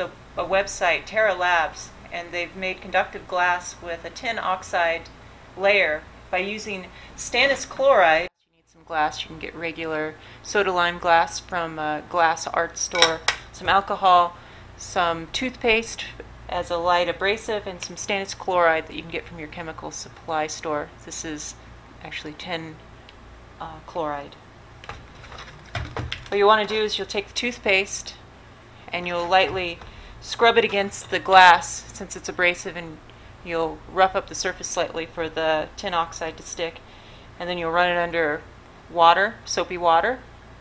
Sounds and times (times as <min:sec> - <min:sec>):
Speech: 0:00.0 - 0:22.8, 0:23.6 - 0:24.4, 0:26.3 - 0:28.2, 0:28.9 - 0:36.8, 0:37.4 - 0:40.2.